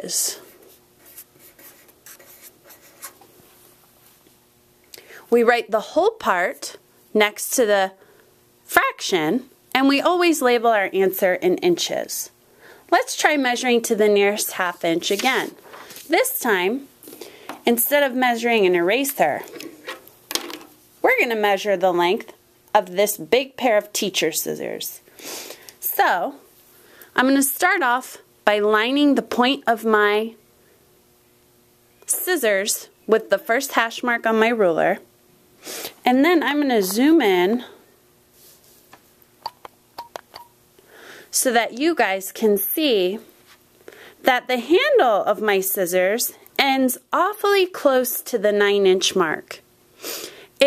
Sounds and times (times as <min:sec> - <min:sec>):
Speech: 0:00.0 - 0:00.5, 0:05.3 - 0:08.0, 0:08.7 - 0:16.9, 0:17.6 - 0:19.7, 0:21.0 - 0:25.0, 0:25.8 - 0:26.4, 0:27.2 - 0:30.4, 0:32.1 - 0:35.1, 0:36.0 - 0:37.8, 0:41.3 - 0:43.3, 0:44.2 - 0:49.6.